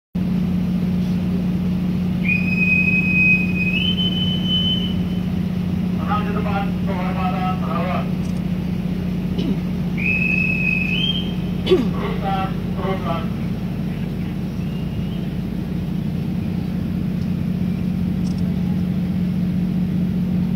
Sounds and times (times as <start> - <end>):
Ship: 0.2 - 20.5.